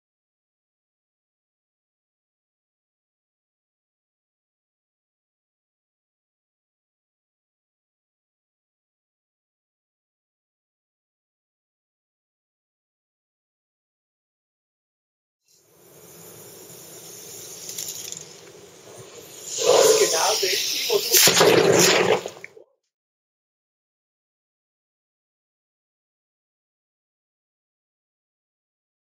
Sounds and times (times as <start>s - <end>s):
Speech: 19.6s - 21.4s.